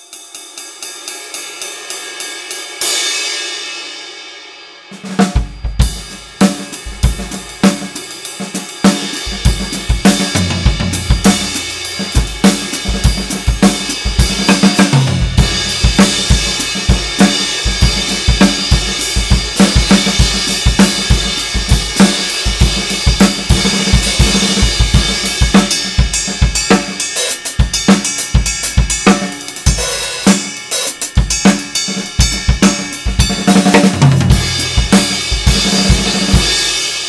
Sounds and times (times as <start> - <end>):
Drum kit: 0.0 - 37.0
Drum: 4.9 - 37.0
Hi-hat: 5.6 - 33.7.